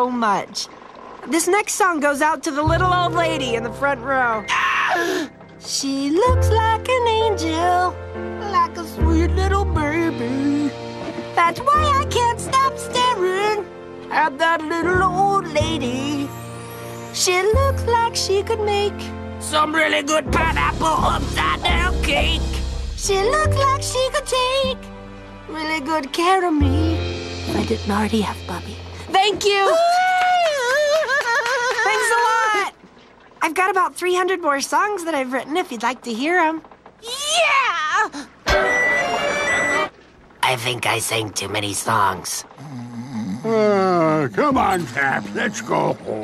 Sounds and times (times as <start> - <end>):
Speech: 40.4 - 42.4.